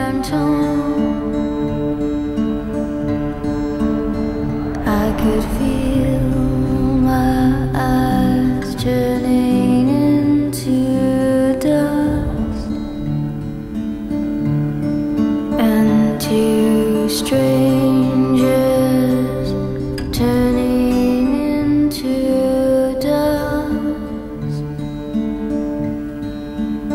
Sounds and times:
Music: 0:00.0 - 0:26.9.

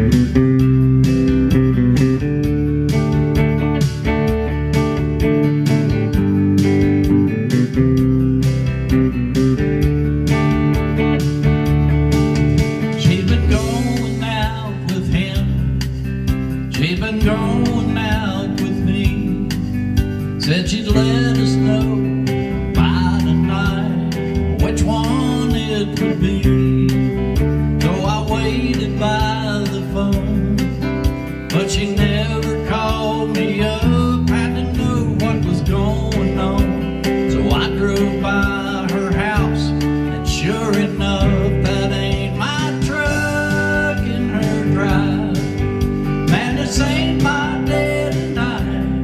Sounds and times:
Music: 0:00.0 - 0:49.0.

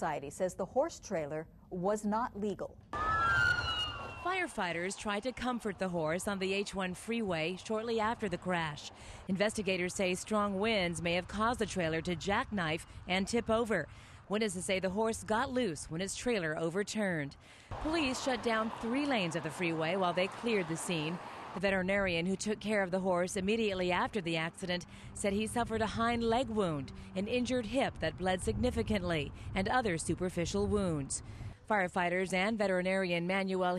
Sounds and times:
Speech: 0:00.0 - 0:02.8, 0:04.3 - 0:33.7.

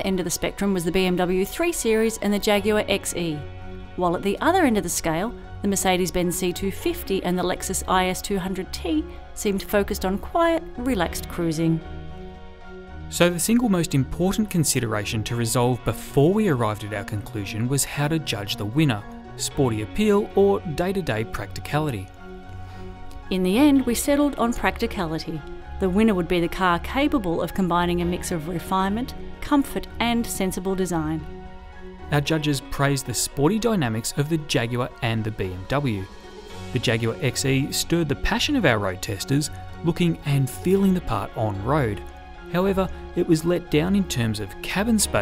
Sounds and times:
Speech: 0:00.0 - 0:03.4, 0:04.0 - 0:11.8, 0:13.2 - 0:22.1, 0:23.3 - 0:31.2, 0:32.1 - 0:36.1, 0:36.8 - 0:42.0, 0:42.6 - 0:45.2
Music: 0:00.0 - 0:45.2.

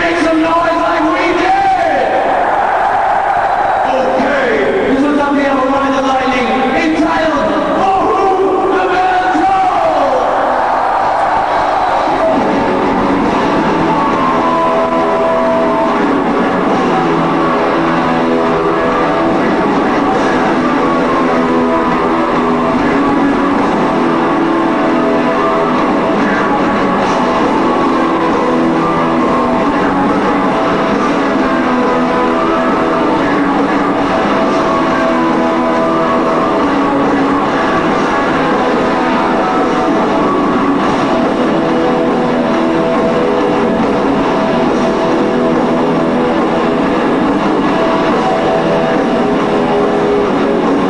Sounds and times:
Speech: 0:00.0 - 0:02.2, 0:03.9 - 0:10.4
Music: 0:00.0 - 0:50.9.

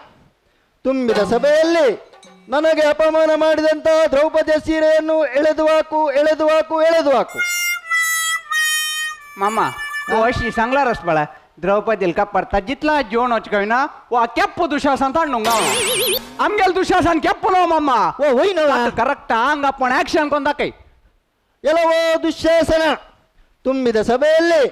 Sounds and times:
Speech: 0:00.9 - 0:07.4, 0:09.4 - 0:15.5, 0:16.4 - 0:20.8, 0:21.6 - 0:24.7.

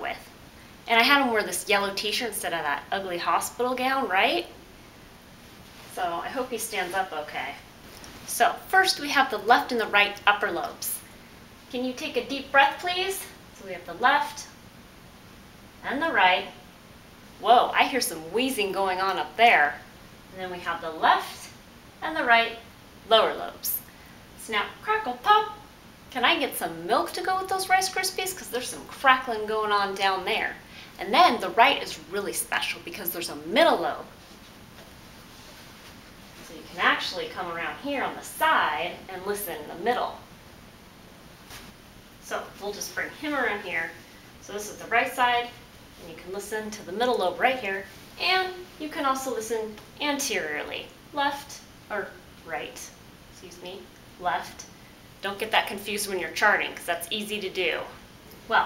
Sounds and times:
Speech: 0:00.0 - 0:00.3, 0:00.9 - 0:04.6, 0:05.9 - 0:07.7, 0:08.3 - 0:11.1, 0:11.7 - 0:14.6, 0:15.8 - 0:16.6, 0:17.4 - 0:34.1, 0:36.4 - 0:40.3, 0:42.2 - 0:58.6.

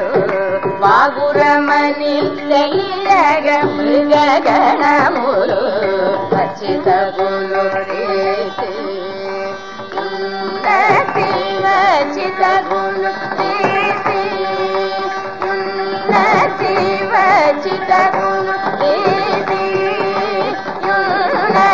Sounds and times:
Carnatic music: 0:00.0 - 0:21.7.

